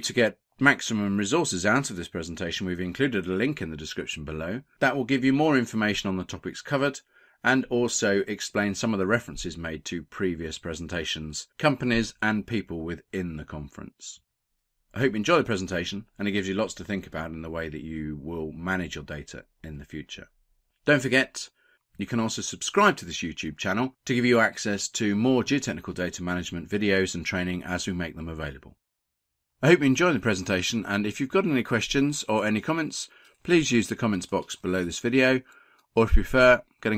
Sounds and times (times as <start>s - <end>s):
Speech: 0.0s - 14.2s, 14.9s - 20.3s, 20.9s - 28.8s, 29.6s - 36.9s.